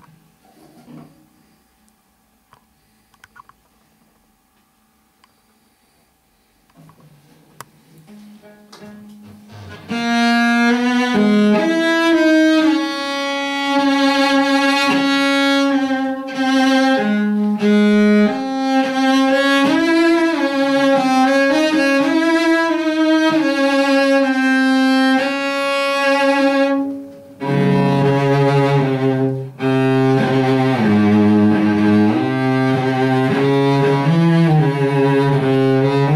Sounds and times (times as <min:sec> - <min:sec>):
Cello: 0:07.9 - 0:36.1.